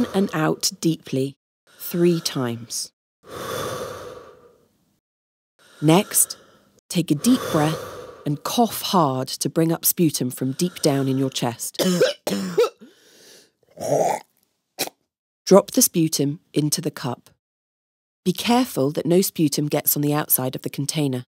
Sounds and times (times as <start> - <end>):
Speech: 0.0 - 2.9, 5.8 - 11.9, 15.5 - 17.3, 18.3 - 21.3.